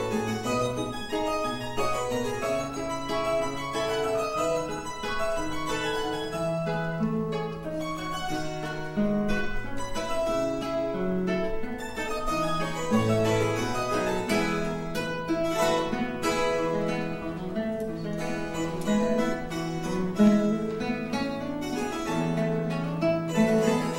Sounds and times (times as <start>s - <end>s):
Bowed string instrument: 0.0s - 23.9s
Classical music: 0.0s - 23.9s
Guitar: 0.0s - 23.9s
Harpsichord: 0.0s - 23.9s
Piano: 0.0s - 23.9s.